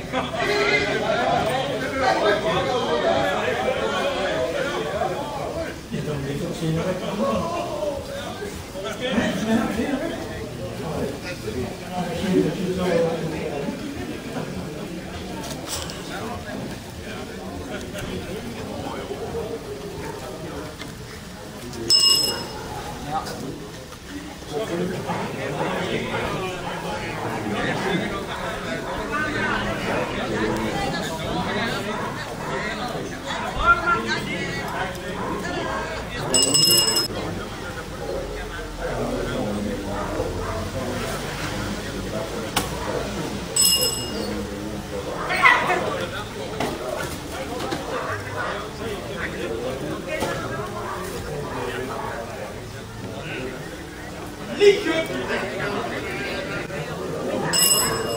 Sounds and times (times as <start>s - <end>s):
Speech: 0.0s - 58.1s.